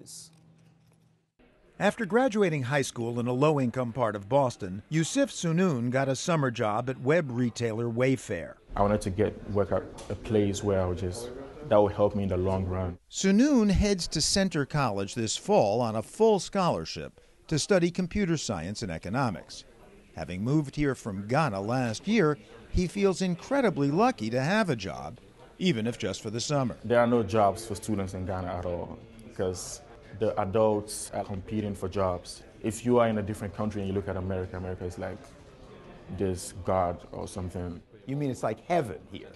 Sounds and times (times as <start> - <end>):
Speech: 1.8 - 35.4, 36.0 - 39.3.